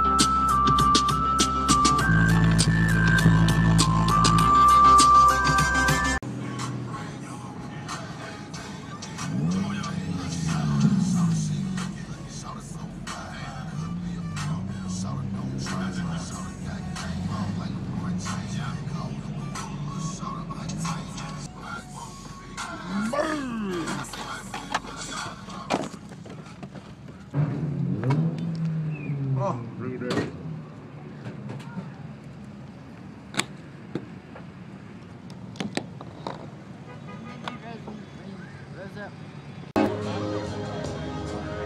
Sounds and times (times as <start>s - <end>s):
Music: 0.0s - 25.7s, 39.8s - 41.6s
Car: 0.0s - 41.6s
Outside, urban or manmade: 0.0s - 41.6s.